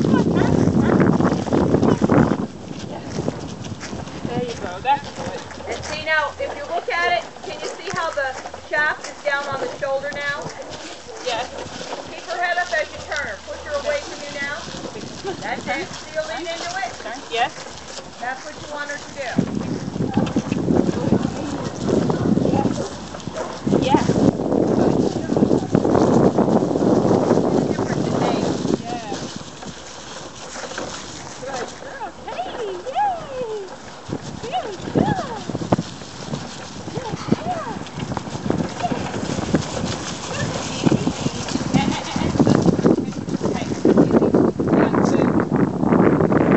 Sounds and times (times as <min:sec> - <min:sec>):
Dog: 0:23.3 - 0:23.7.